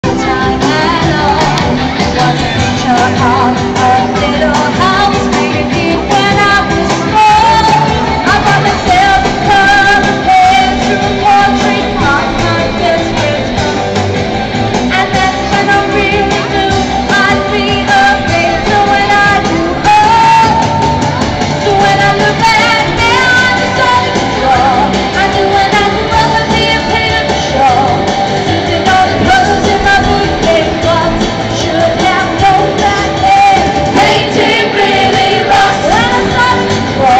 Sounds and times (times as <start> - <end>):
Inside, large room or hall: 0.0 - 37.1
Music: 0.0 - 37.1
Singing: 0.0 - 37.1.